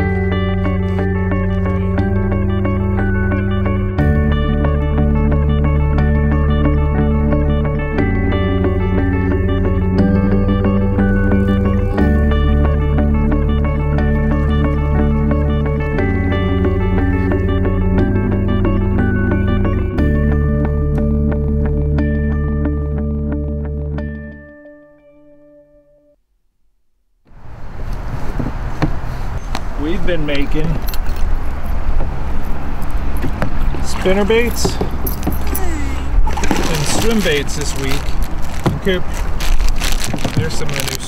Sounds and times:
Speech: 0:29.8 - 0:30.8, 0:33.8 - 0:34.8, 0:35.5 - 0:38.0, 0:38.8 - 0:39.1, 0:40.4 - 0:41.0.

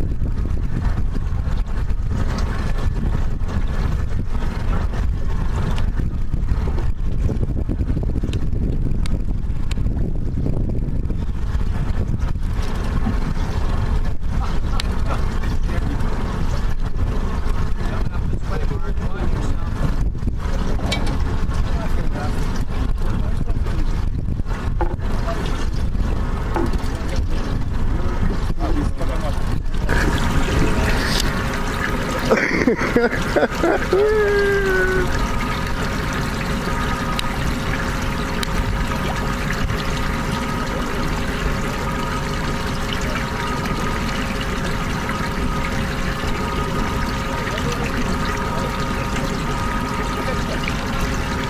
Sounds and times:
Motorboat, speedboat: 0:00.0 - 0:51.4
Speech: 0:17.8 - 0:19.8, 0:21.7 - 0:22.5, 0:26.9 - 0:29.6, 0:47.3 - 0:49.5.

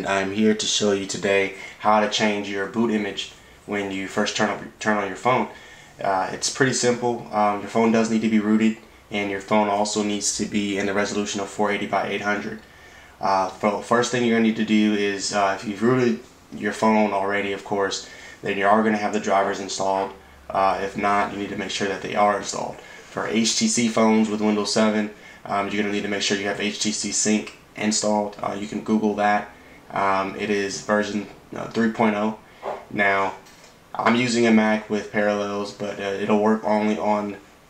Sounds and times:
Speech: 0:00.0 - 0:37.5.

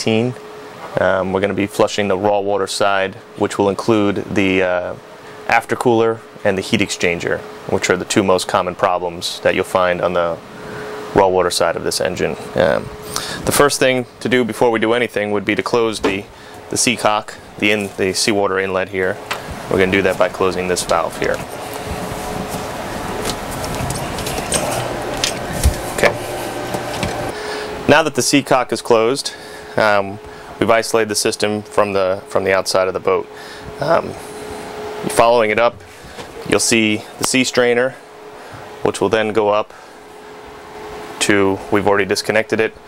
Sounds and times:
Speech: 0:00.0 - 0:10.4, 0:11.1 - 0:21.4, 0:27.9 - 0:34.2, 0:35.0 - 0:35.8, 0:36.4 - 0:38.0, 0:38.8 - 0:39.8, 0:41.2 - 0:42.8.

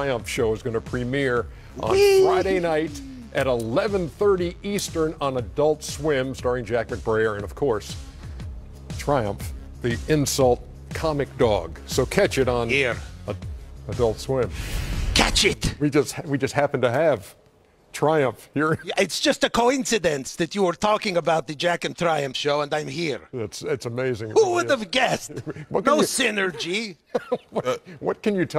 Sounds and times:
Music: 0:00.0 - 0:15.8.

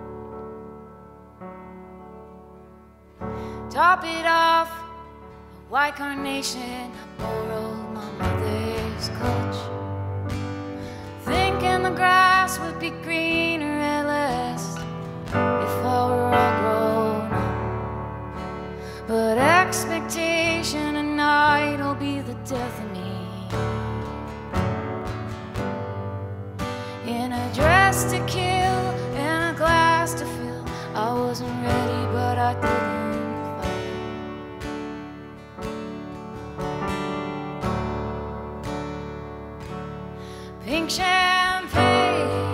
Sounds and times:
Music: 0:00.0 - 0:42.5.

